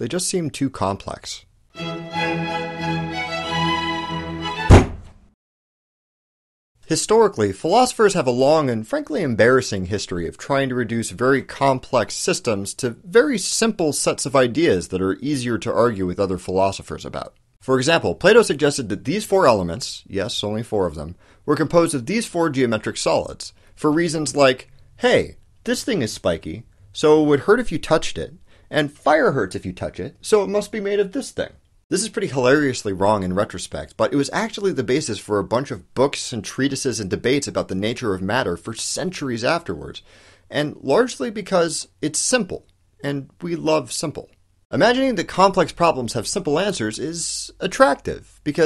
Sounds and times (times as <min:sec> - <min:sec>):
Narration, monologue: 0:00.0 - 0:02.9, 0:06.8 - 0:48.6.